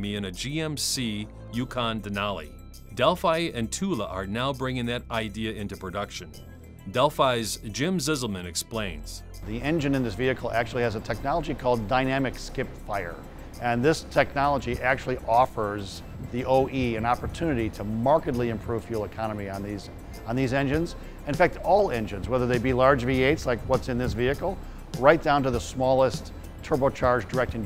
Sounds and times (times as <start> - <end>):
Music: 0.0 - 27.6
Speech: 0.0 - 27.6.